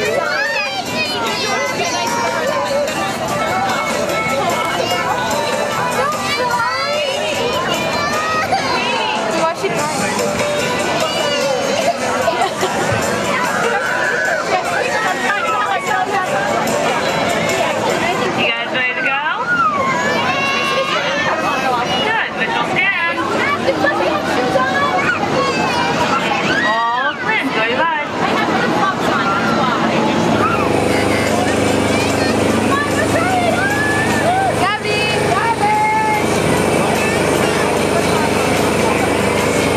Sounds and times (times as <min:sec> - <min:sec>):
Music: 0:00.0 - 0:18.6, 0:30.4 - 0:39.7
Speech: 0:00.0 - 0:39.7.